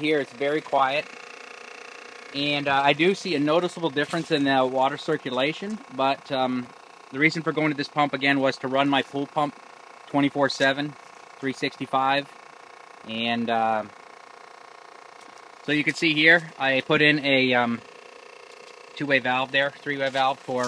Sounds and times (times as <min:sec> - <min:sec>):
Speech: 0:00.0 - 0:01.1, 0:02.4 - 0:12.3, 0:13.1 - 0:13.9, 0:15.7 - 0:17.8, 0:19.0 - 0:20.6.